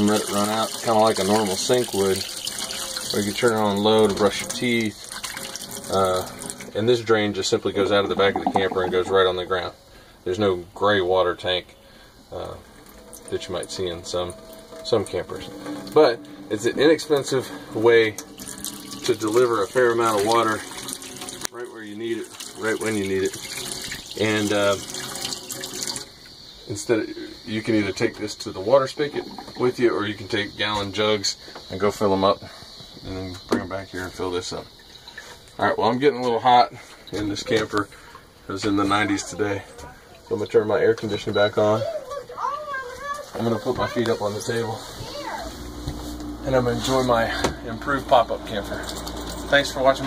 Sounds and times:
Speech: 0.0 - 2.2, 3.1 - 5.0, 6.8 - 11.7, 24.2 - 24.8, 26.7 - 32.4, 38.5 - 45.4, 46.4 - 48.9, 49.5 - 50.0.

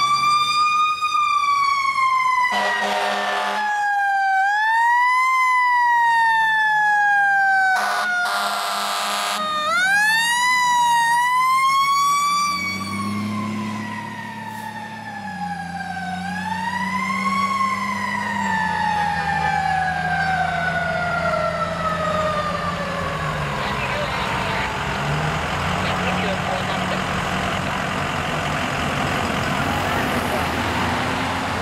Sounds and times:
Fire engine, fire truck (siren): 0.0 - 31.6
Outside, urban or manmade: 0.0 - 31.6
Truck: 0.0 - 31.6.

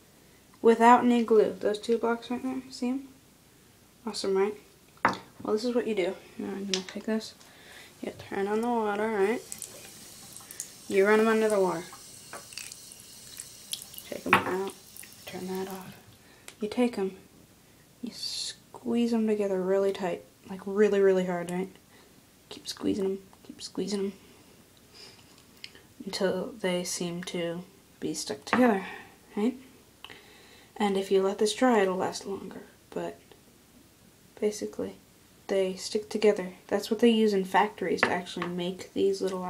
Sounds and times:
Speech: 0.6 - 3.2, 4.0 - 4.6, 5.4 - 7.4, 8.0 - 9.4, 10.9 - 11.9, 14.1 - 16.0, 16.6 - 17.2, 18.0 - 21.8, 22.5 - 24.2, 26.0 - 29.6, 30.8 - 33.2, 34.4 - 39.4.

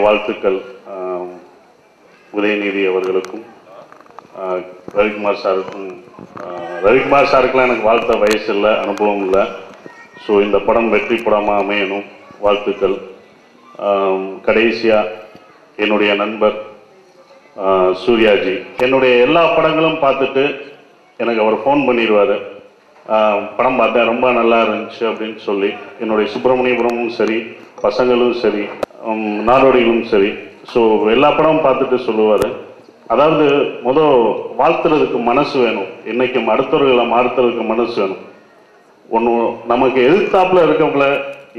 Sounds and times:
Male speech, man speaking: 0.0 - 1.5, 2.3 - 13.1, 13.8 - 16.7, 17.6 - 38.3, 39.1 - 41.5
Narration, monologue: 0.0 - 41.5.

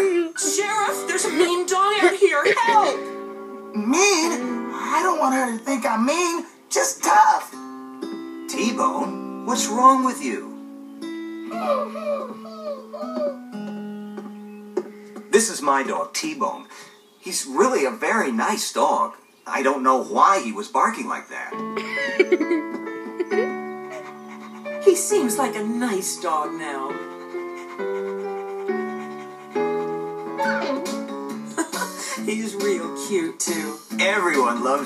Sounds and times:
Music: 0.0 - 15.8, 21.5 - 34.8
Dog: 23.9 - 24.9, 26.9 - 30.8.

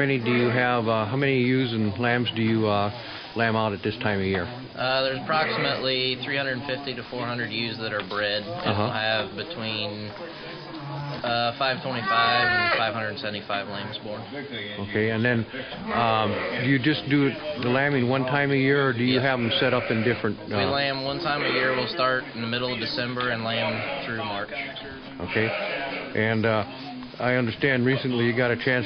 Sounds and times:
Speech: 0.0 - 28.8
Bleat: 12.0 - 12.9, 19.4 - 20.2, 25.3 - 26.1.

